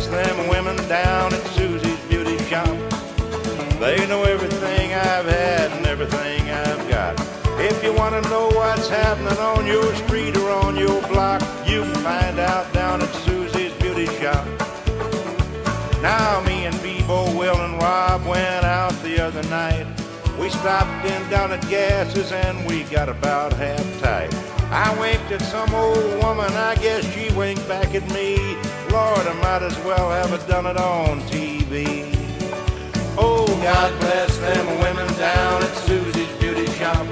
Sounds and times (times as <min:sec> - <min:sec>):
Exciting music: 0:00.1 - 0:37.1.